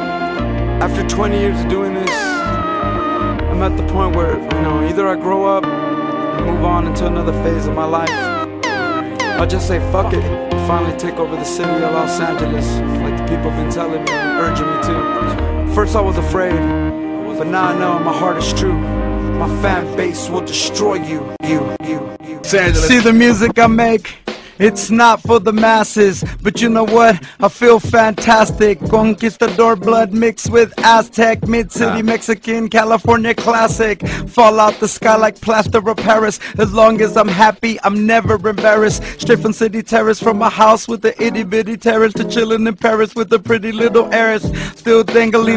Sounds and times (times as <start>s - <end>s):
Music: 0.0s - 45.5s.